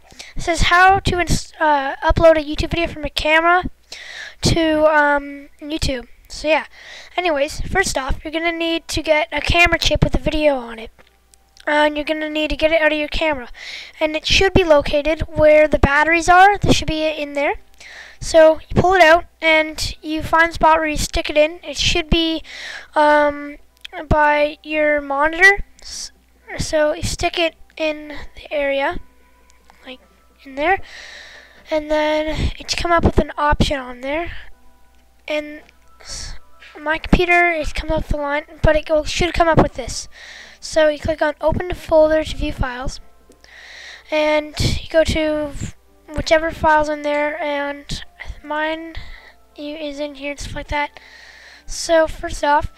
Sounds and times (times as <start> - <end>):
Speech: 0.4 - 3.7, 4.4 - 10.9, 11.6 - 17.6, 18.2 - 22.4, 23.0 - 29.0, 31.7 - 34.4, 35.3 - 43.0, 44.1 - 49.0, 49.6 - 50.9, 51.7 - 52.7.